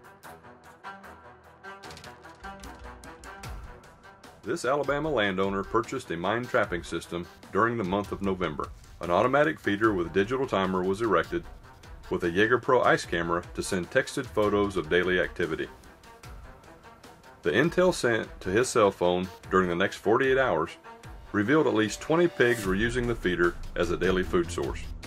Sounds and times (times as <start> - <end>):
Music: 0.0 - 25.0
Speech: 4.5 - 11.4, 12.1 - 15.7, 17.4 - 24.9.